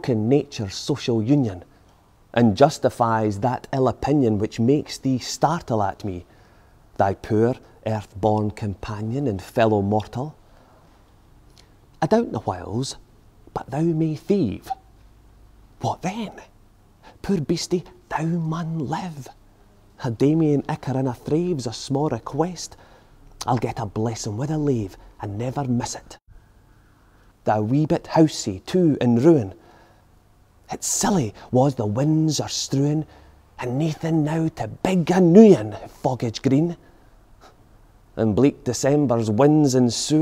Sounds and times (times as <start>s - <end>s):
Speech: 0.0s - 1.7s, 2.3s - 6.3s, 7.0s - 10.4s, 12.0s - 14.9s, 15.8s - 16.5s, 17.2s - 19.4s, 20.0s - 22.8s, 23.4s - 26.2s, 27.4s - 29.6s, 30.7s - 36.8s, 38.2s - 40.2s.